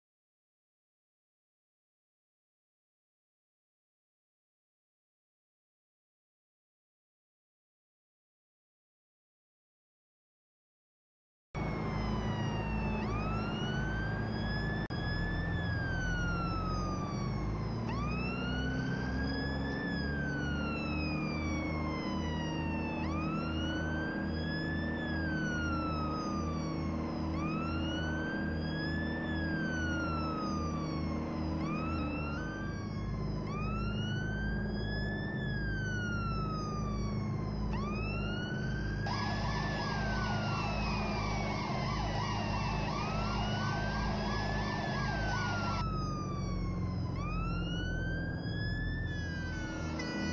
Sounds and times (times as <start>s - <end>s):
Vehicle: 11.6s - 50.3s.